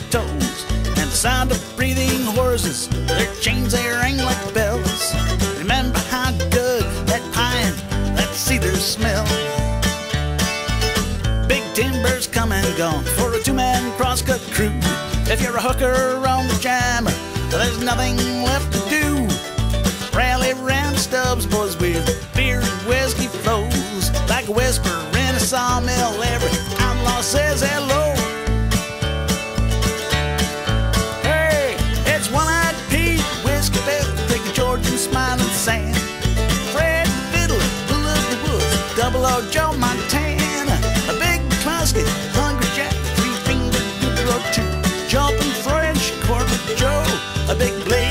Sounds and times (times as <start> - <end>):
Rhythm and blues: 0.0 - 48.1.